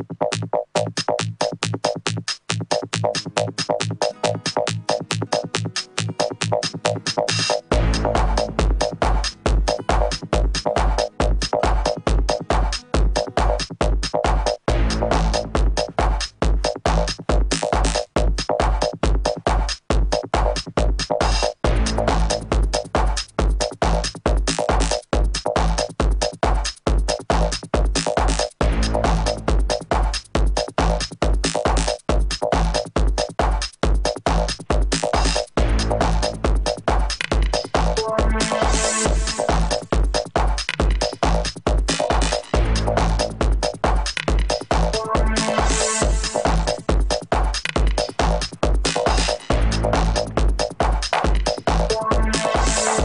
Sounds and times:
Music: 0.0s - 53.0s.

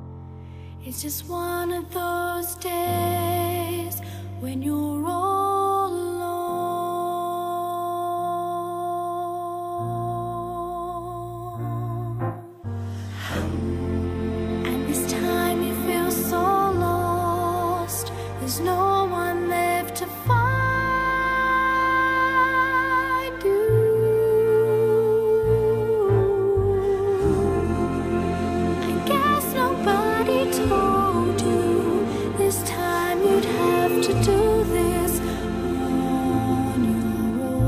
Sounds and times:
Choir: 13.0s - 37.6s.

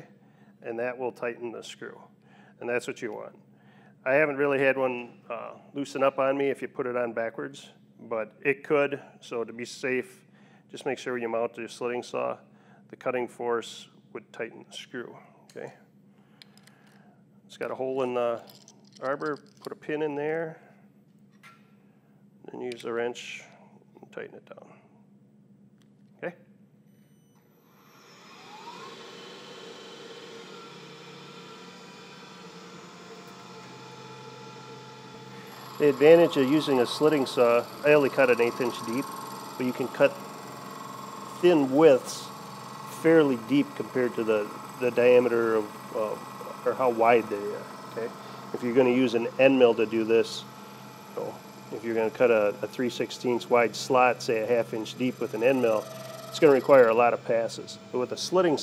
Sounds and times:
Speech: 0.0s - 3.4s, 4.0s - 15.8s, 17.5s - 20.6s, 22.4s - 24.8s, 26.2s - 26.4s, 35.8s - 40.2s, 41.4s - 42.3s, 43.0s - 50.5s, 51.2s - 58.6s.

